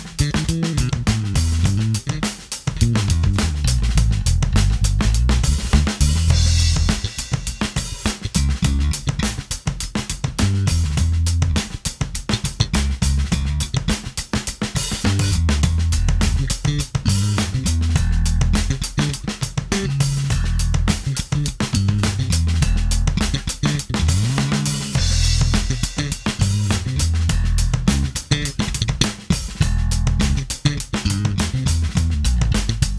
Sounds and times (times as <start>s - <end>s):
Jazz: 0.0s - 32.9s.